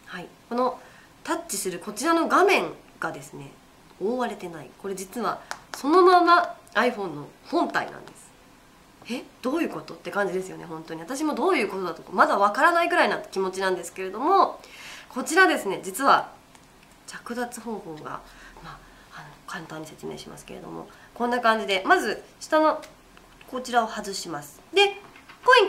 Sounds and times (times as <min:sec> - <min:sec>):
Speech: 0:00.1 - 0:08.3, 0:09.0 - 0:16.4, 0:17.1 - 0:25.6.